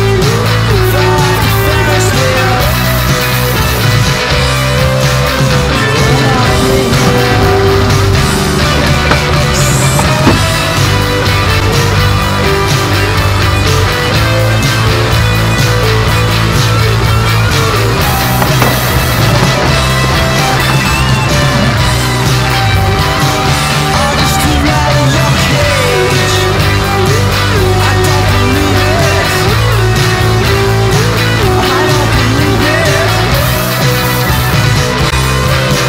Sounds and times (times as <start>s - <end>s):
Grunge: 0.0s - 35.8s.